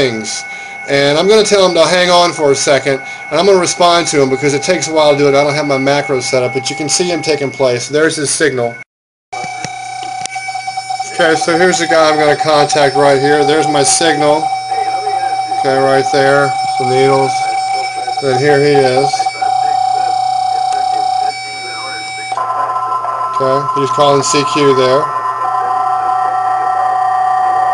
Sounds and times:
Speech: 0.0 - 8.8, 11.1 - 25.1.

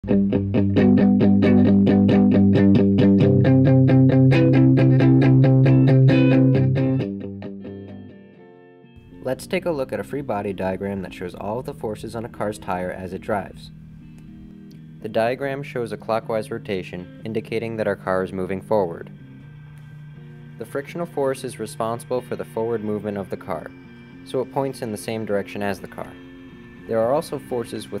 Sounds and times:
Music: 0.0 - 28.0
Speech: 9.2 - 13.7, 15.0 - 19.1, 20.6 - 23.7, 24.3 - 26.2, 26.9 - 28.0.

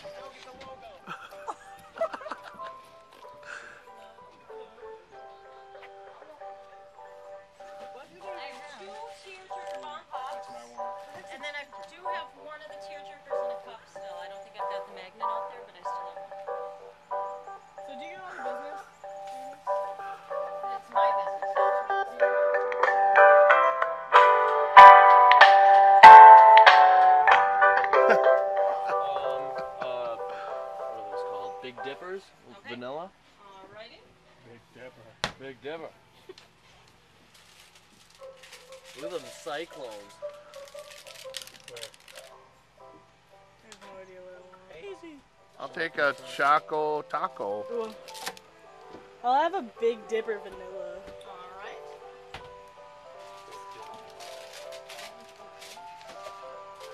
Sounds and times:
Music: 0.0 - 32.9, 37.6 - 56.9.

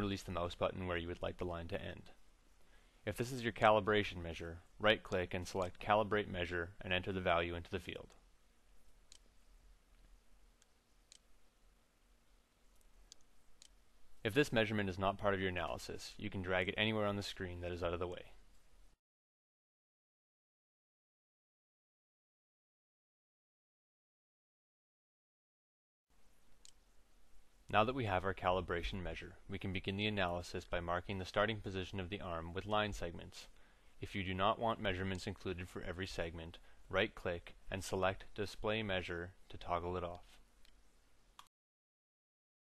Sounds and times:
Speech: 0.0 - 2.2, 3.1 - 8.2, 14.3 - 18.4, 27.7 - 40.4.

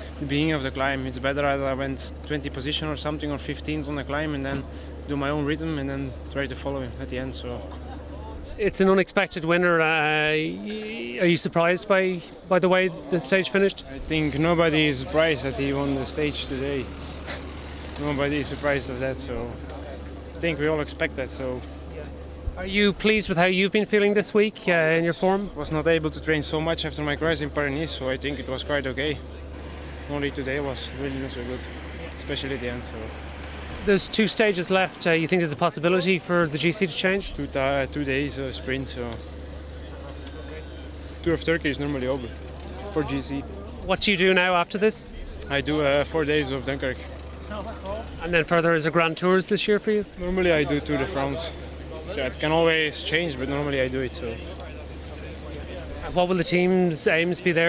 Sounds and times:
Speech: 0.2 - 7.6, 8.5 - 16.9, 18.0 - 29.2, 33.8 - 39.2, 41.2 - 57.6.

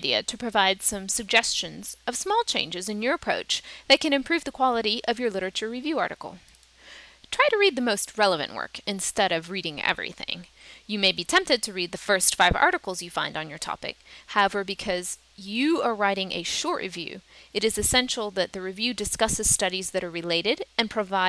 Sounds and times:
Speech: 0.0 - 6.4, 7.3 - 21.2.

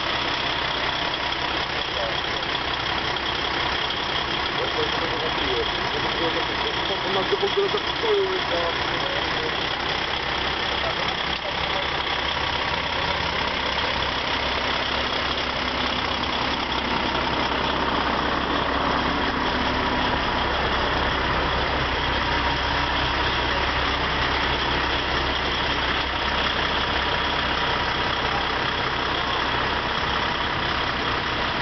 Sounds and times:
Truck: 0.0 - 31.6.

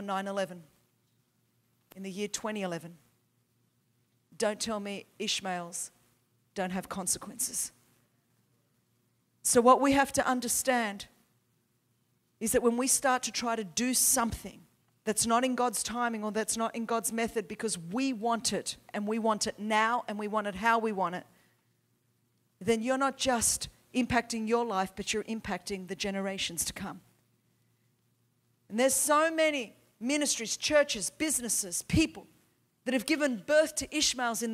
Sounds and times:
Speech: 0.0 - 0.7, 2.0 - 3.0, 4.4 - 5.9, 6.6 - 7.8, 9.4 - 11.2, 12.4 - 21.3, 22.6 - 27.0, 28.7 - 34.5.

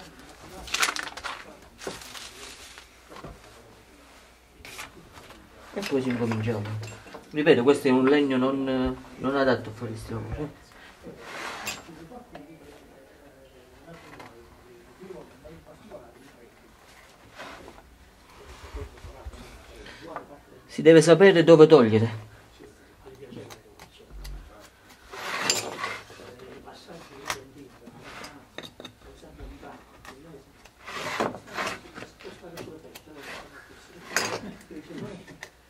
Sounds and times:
Speech: 5.3 - 16.8, 17.4 - 24.8, 26.0 - 30.5, 31.4 - 35.4.

